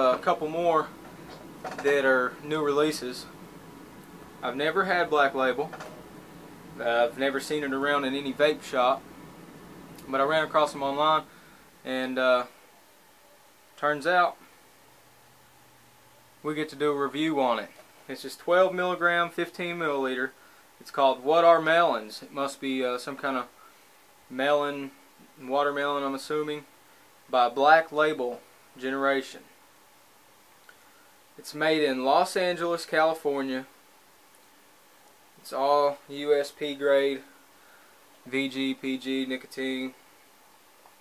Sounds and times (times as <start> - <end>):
Speech: 0.0 - 1.0, 1.7 - 3.4, 4.4 - 5.8, 6.8 - 9.1, 10.0 - 12.6, 13.8 - 14.4, 16.4 - 23.6, 24.3 - 26.7, 27.3 - 29.5, 31.4 - 33.7, 35.4 - 37.3, 38.2 - 40.0.